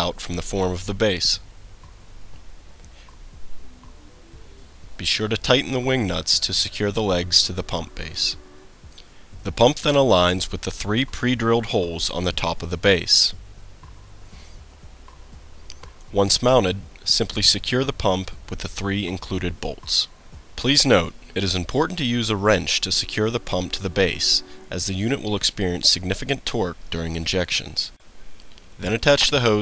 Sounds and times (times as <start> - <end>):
Speech: 0.0 - 1.4, 5.0 - 8.4, 9.4 - 13.4, 16.1 - 28.0, 28.8 - 29.6.